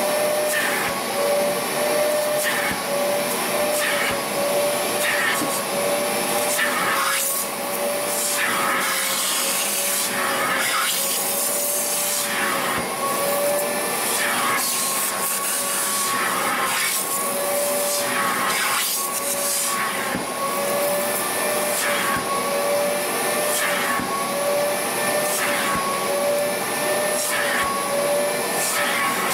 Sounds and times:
Vacuum cleaner: 0.0s - 29.3s.

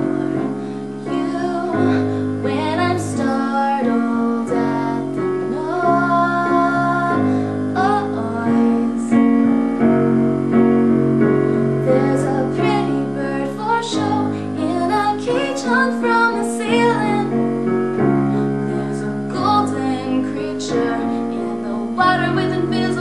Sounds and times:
Music: 0.0s - 23.0s.

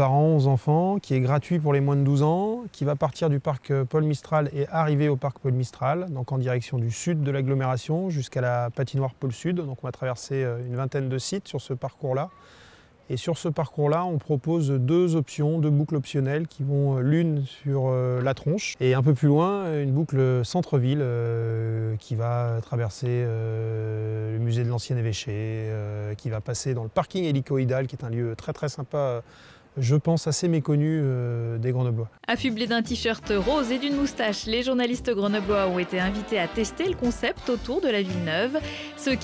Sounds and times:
Speech: 0.0s - 12.3s, 13.1s - 29.2s, 29.8s - 39.2s.

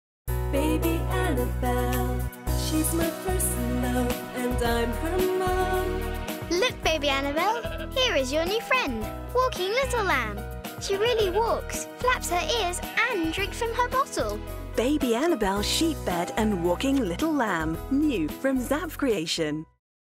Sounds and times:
Music: 0.3s - 19.8s
Speech: 6.5s - 10.2s, 10.8s - 19.7s.

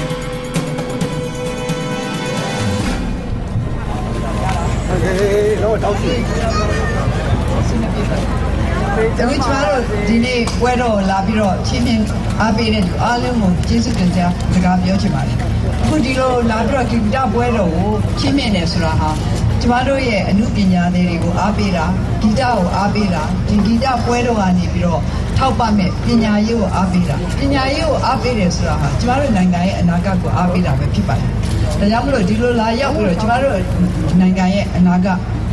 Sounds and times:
Female speech, woman speaking: 8.8s - 35.3s.

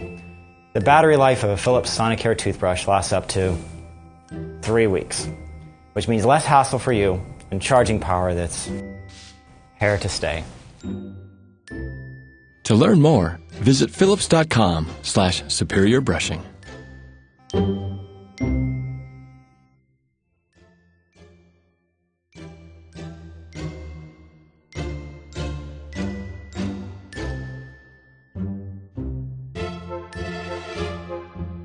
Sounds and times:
Music: 0.0s - 31.6s
Speech: 0.8s - 3.6s, 4.6s - 5.4s, 6.0s - 8.8s, 9.8s - 10.5s, 12.7s - 16.6s.

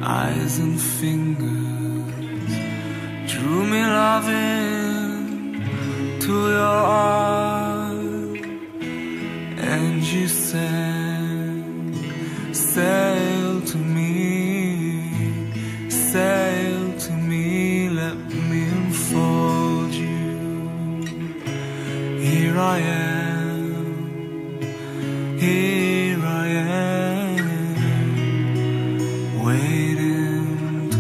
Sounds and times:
Music: 0.0s - 31.0s.

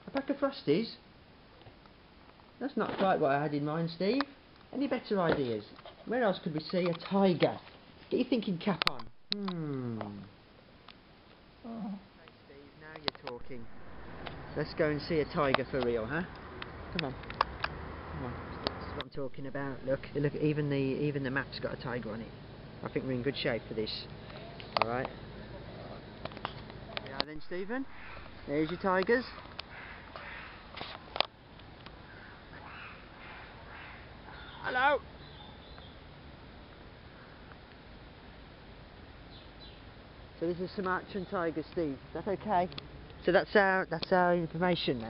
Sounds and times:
Outside, urban or manmade: 0.0s - 45.0s.

